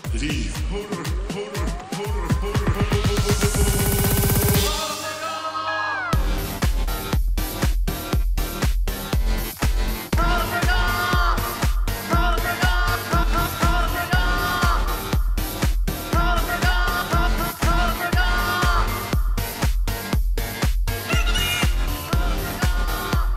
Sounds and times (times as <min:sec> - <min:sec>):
Music: 0:00.0 - 0:23.3.